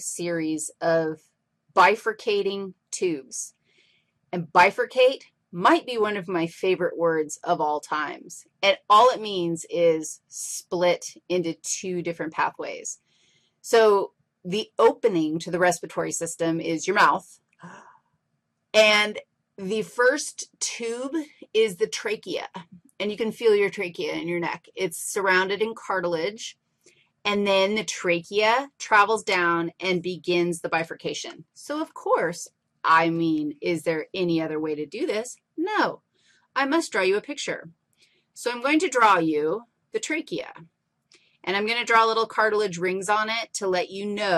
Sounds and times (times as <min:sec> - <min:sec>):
Speech: 0:00.0 - 0:01.2, 0:01.8 - 0:03.5, 0:04.4 - 0:13.0, 0:13.7 - 0:17.8, 0:18.8 - 0:26.5, 0:27.3 - 0:36.0, 0:36.6 - 0:37.7, 0:38.4 - 0:40.6, 0:41.5 - 0:44.3.